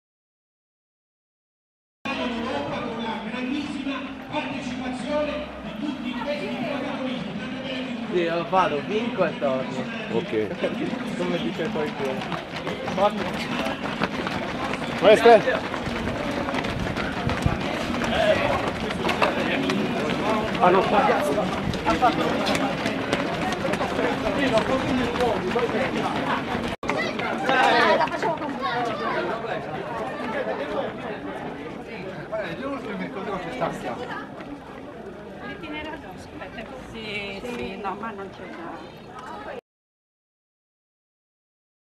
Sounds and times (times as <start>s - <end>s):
Outside, urban or manmade: 2.1s - 39.6s
Run: 2.1s - 39.6s
Speech: 2.1s - 39.6s.